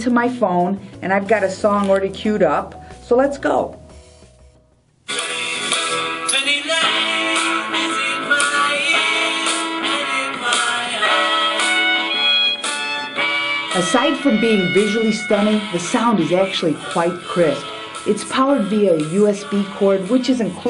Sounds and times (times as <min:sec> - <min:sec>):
Speech: 0:00.0 - 0:03.8, 0:13.8 - 0:20.7
Music: 0:00.0 - 0:20.7.